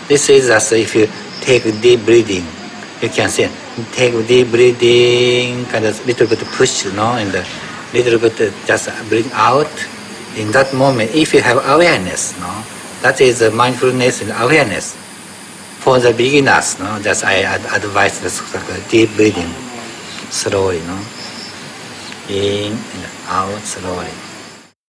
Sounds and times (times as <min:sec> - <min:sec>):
Speech: 0:00.1 - 0:15.0, 0:15.8 - 0:21.1, 0:22.1 - 0:24.2.